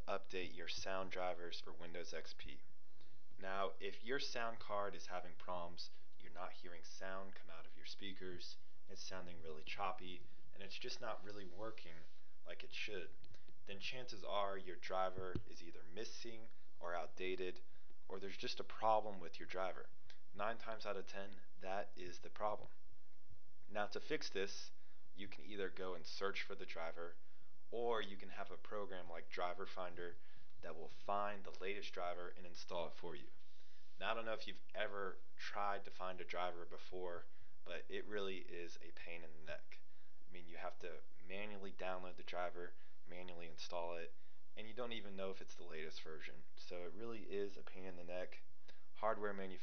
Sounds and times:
Speech: 0.0 - 2.7, 3.4 - 22.8, 23.7 - 33.4, 34.0 - 49.6.

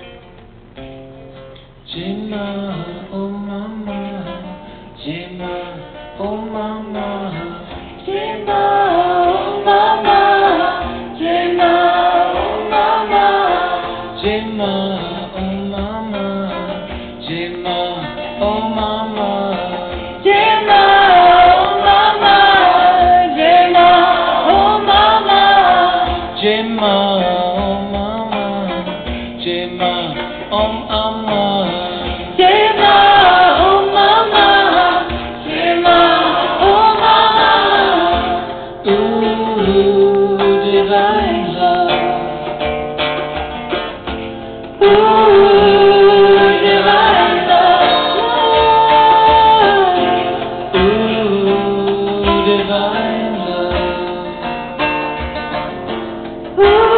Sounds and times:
Mantra: 1.9 - 42.3, 44.8 - 54.5, 56.6 - 56.9.

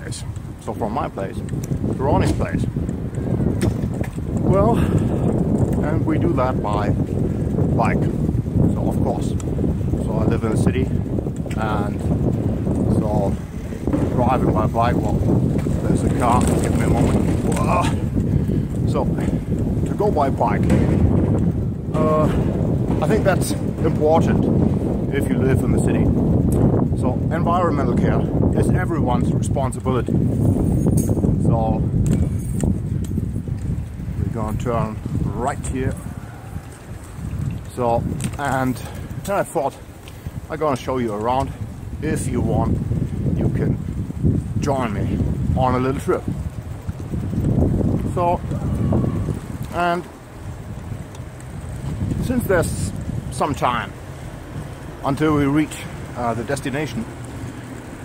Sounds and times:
Speech: 0.0 - 1.4, 2.0 - 2.7, 4.5 - 4.9, 5.8 - 7.0, 7.8 - 8.1, 8.7 - 9.4, 10.0 - 12.1, 12.9 - 13.4, 14.1 - 15.2, 15.8 - 18.0, 18.9 - 19.2, 19.9 - 20.7, 21.9 - 22.4, 23.0 - 24.5, 25.1 - 26.1, 27.0 - 30.1, 31.4 - 31.8, 34.2 - 36.0, 37.7 - 39.8, 40.5 - 42.8, 43.4 - 43.8, 44.6 - 46.3, 48.1 - 48.8, 49.7 - 50.1, 52.2 - 54.0, 55.0 - 57.1
Bicycle: 0.0 - 58.0.

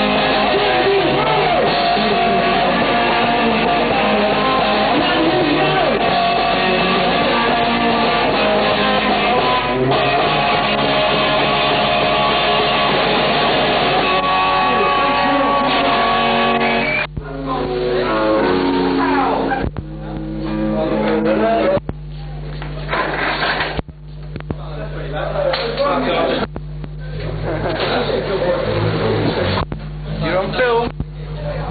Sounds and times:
Music: 0.0 - 21.8
Speech: 17.2 - 18.4, 19.0 - 22.4, 24.5 - 29.6, 30.2 - 31.7.

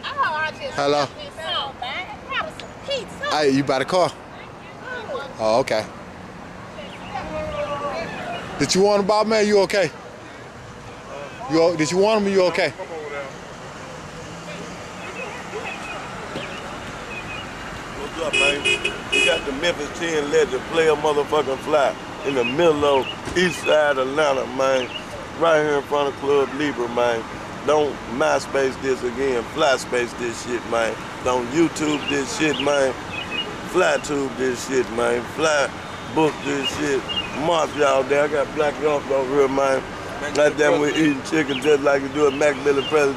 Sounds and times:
Speech: 18.0 - 33.0, 33.7 - 43.1.

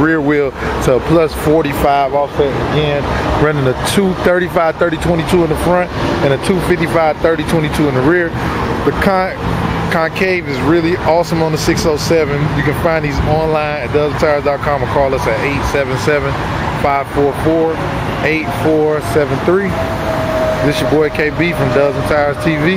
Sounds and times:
Speech: 0.0 - 19.8, 20.6 - 22.7
Car: 0.0 - 22.7.

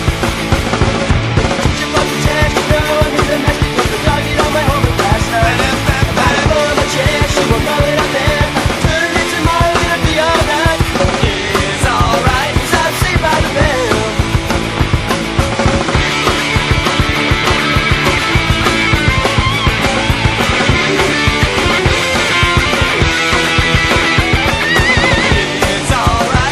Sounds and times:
Music: 0.0 - 26.5.

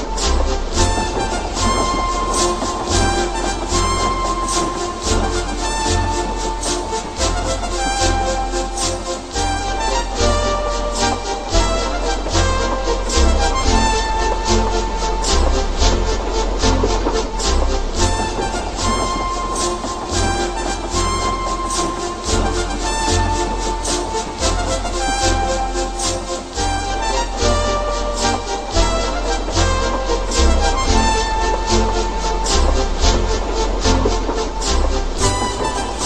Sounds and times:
Music: 0.0 - 36.0.

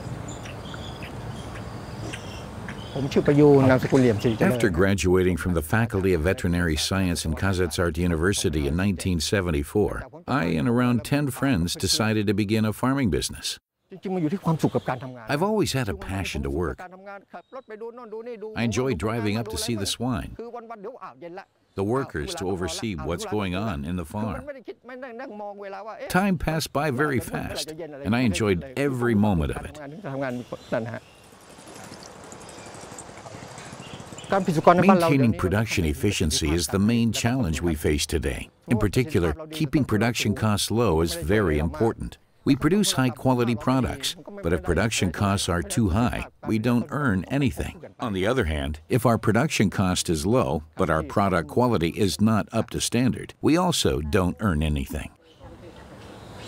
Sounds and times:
Speech: 3.0 - 31.0, 34.4 - 56.0.

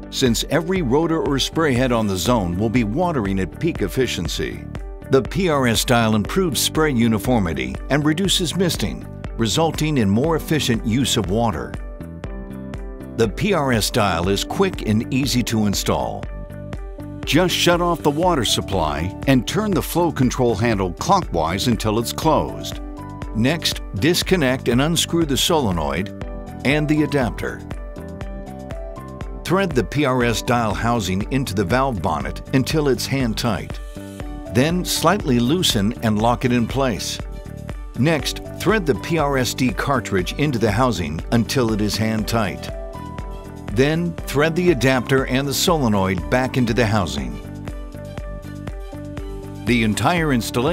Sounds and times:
Music: 0.0 - 50.7
Speech: 0.1 - 11.8, 13.2 - 16.3, 17.3 - 22.8, 23.4 - 27.6, 29.4 - 33.8, 34.6 - 37.2, 38.0 - 42.7, 43.7 - 47.4, 49.7 - 50.7.

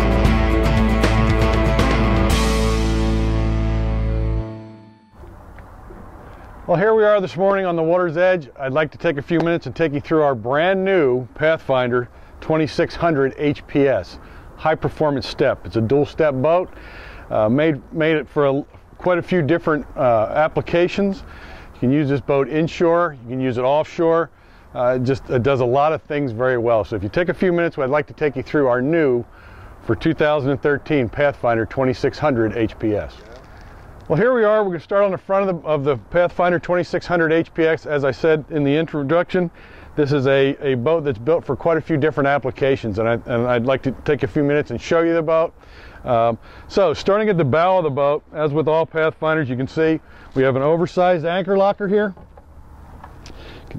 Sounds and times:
Speech: 6.7 - 33.5, 34.1 - 52.2.

